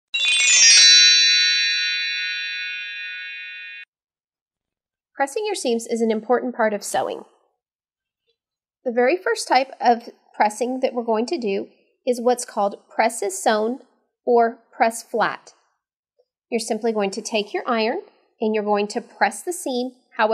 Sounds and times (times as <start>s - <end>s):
Speech: 5.2s - 7.4s, 8.9s - 15.5s, 16.5s - 20.3s.